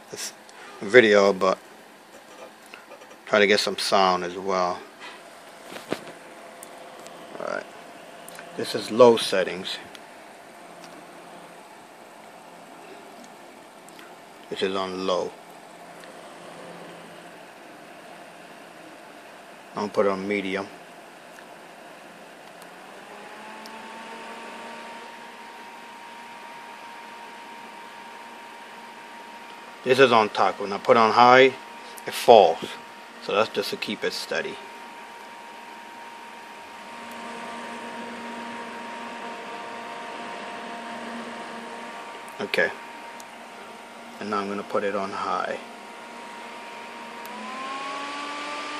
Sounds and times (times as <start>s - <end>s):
Speech: 0.1s - 1.6s, 3.3s - 4.9s, 7.4s - 7.7s, 8.6s - 9.9s, 14.5s - 15.4s, 19.8s - 20.8s, 29.8s - 34.7s, 42.4s - 42.8s, 44.2s - 45.7s.